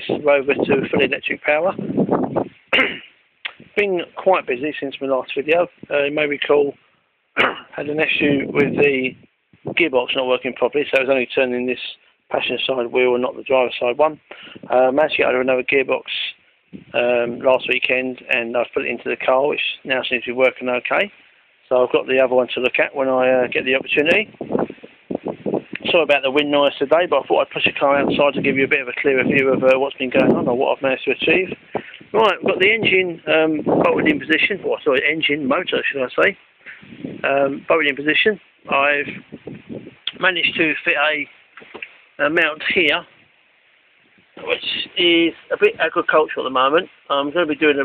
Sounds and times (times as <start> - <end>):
Speech: 0.0 - 1.8, 3.5 - 6.8, 7.4 - 24.3, 25.8 - 36.4, 37.2 - 39.2, 40.1 - 41.3, 42.2 - 43.1, 44.4 - 47.8.